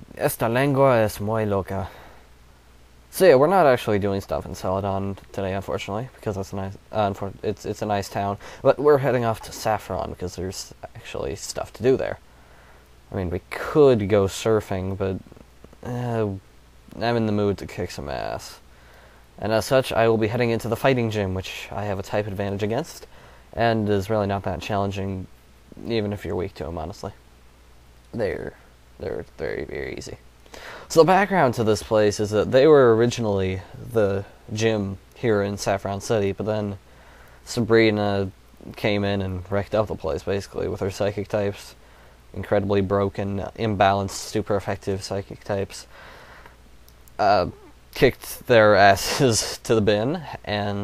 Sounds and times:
Speech: 0.0s - 2.0s, 3.1s - 12.2s, 13.1s - 18.6s, 19.4s - 27.2s, 28.1s - 30.2s, 30.9s - 36.8s, 37.4s - 45.9s, 47.2s - 50.8s.

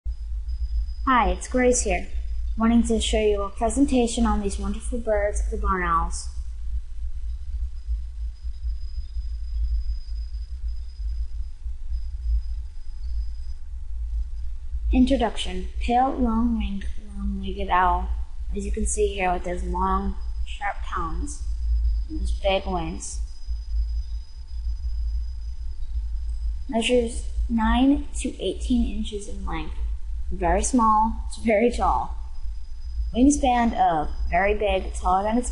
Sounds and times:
Speech: 1.1s - 6.3s, 14.9s - 21.4s, 22.1s - 23.2s, 26.7s - 32.2s, 33.2s - 35.5s.

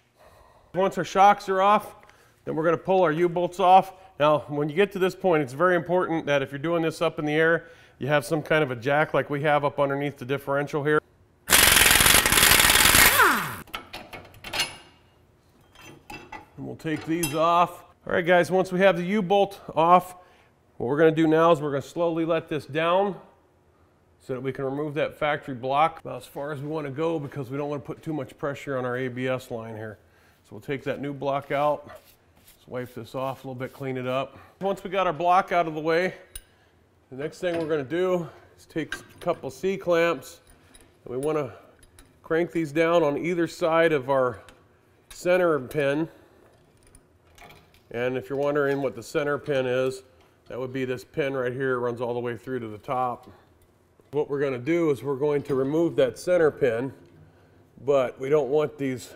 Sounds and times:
Speech: 0.8s - 11.0s, 16.6s - 20.2s, 20.8s - 23.3s, 24.2s - 31.9s, 32.6s - 36.2s, 37.1s - 40.4s, 41.1s - 41.6s, 42.3s - 44.5s, 45.2s - 46.2s, 47.9s - 53.4s, 54.1s - 57.0s, 57.8s - 59.1s.

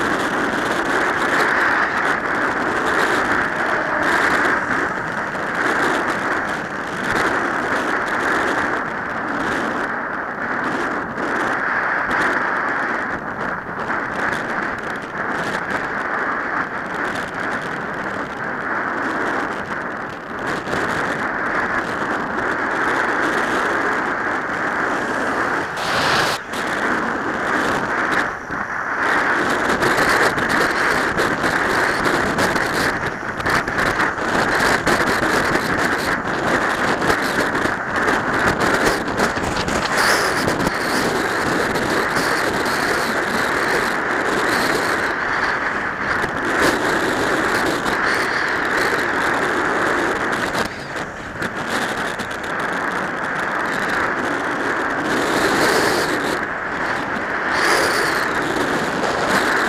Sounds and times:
Bus: 0.0s - 59.6s.

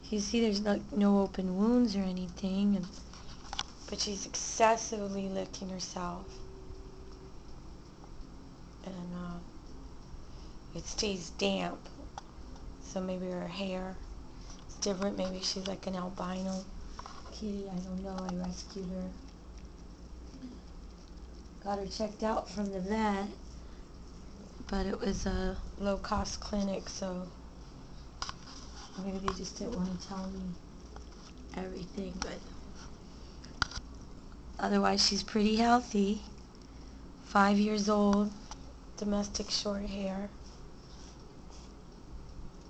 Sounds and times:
Speech: 0.0s - 3.0s, 3.9s - 6.3s, 8.8s - 9.5s, 10.8s - 12.0s, 12.8s - 14.0s, 14.7s - 16.7s, 17.3s - 19.2s, 21.6s - 23.4s, 24.6s - 27.4s, 29.0s - 30.6s, 31.5s - 32.6s, 34.6s - 36.3s, 37.3s - 38.4s, 39.0s - 40.4s.

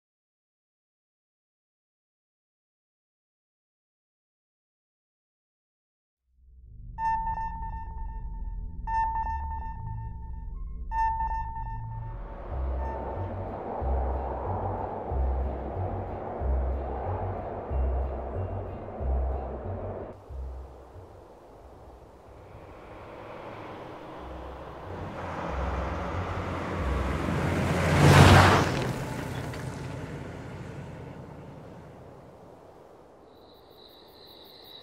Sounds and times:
Sonar: 6.6s - 13.4s.

